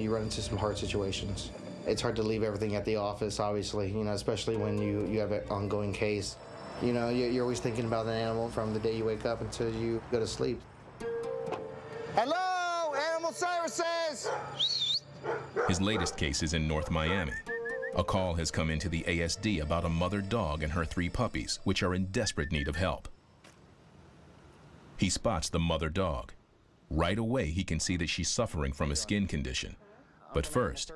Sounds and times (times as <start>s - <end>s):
Speech: 0.0s - 10.6s, 12.2s - 14.3s, 15.7s - 17.4s, 18.0s - 23.1s, 25.0s - 30.9s
Music: 11.0s - 12.4s, 16.8s - 21.8s
Dog: 14.2s - 14.6s, 15.2s - 16.2s.